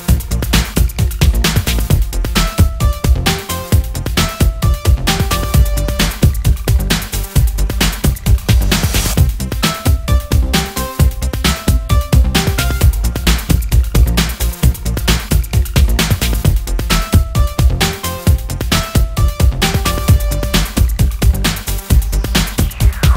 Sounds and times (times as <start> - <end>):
Music: 0.0 - 23.1.